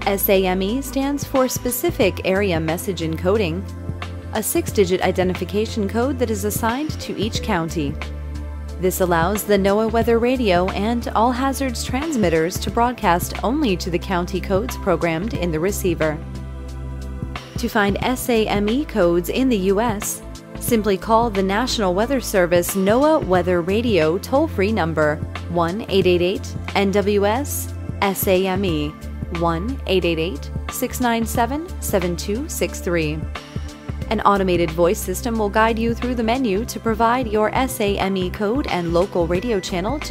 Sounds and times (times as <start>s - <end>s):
Speech: 0.0s - 3.6s, 4.4s - 8.0s, 8.8s - 16.2s, 17.6s - 33.3s, 34.1s - 40.1s
Music: 0.0s - 40.1s.